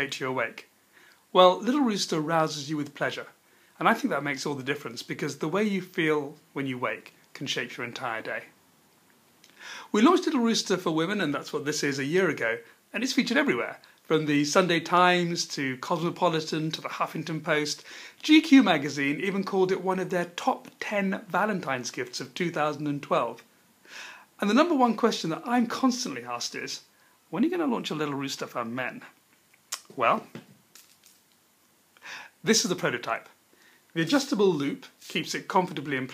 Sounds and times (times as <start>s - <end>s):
Speech: 0.0s - 0.7s, 1.3s - 8.6s, 9.9s - 23.5s, 24.4s - 29.2s, 29.8s - 30.4s, 32.4s - 36.1s.